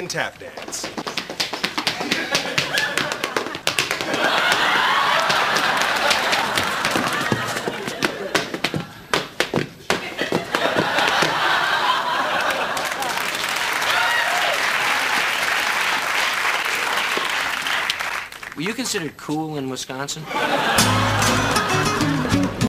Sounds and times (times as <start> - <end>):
Speech: 0.0 - 0.9, 18.6 - 20.3
Music: 20.8 - 22.6.